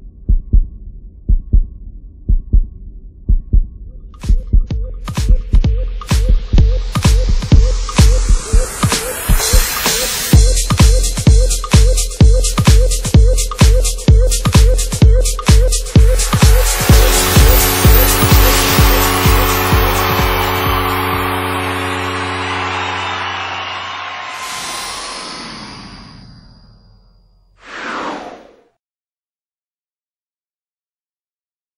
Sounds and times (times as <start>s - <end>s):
Music: 0.2s - 25.1s.